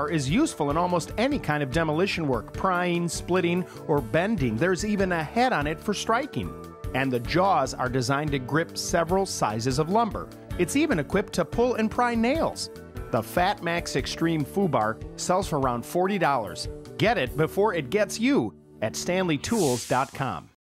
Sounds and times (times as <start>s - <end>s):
Music: 0.0s - 20.6s
Speech: 0.0s - 20.6s.